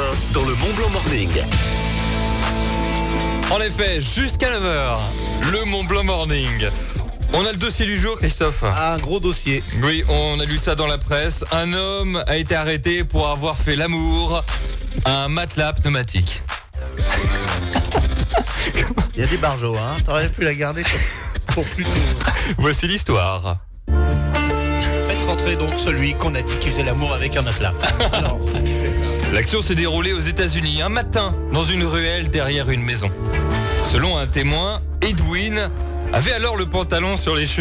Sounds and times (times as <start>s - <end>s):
Speech: 0.0s - 1.6s, 3.4s - 16.5s, 18.7s - 23.7s, 25.1s - 33.3s, 33.9s - 37.6s
Music: 0.0s - 37.6s.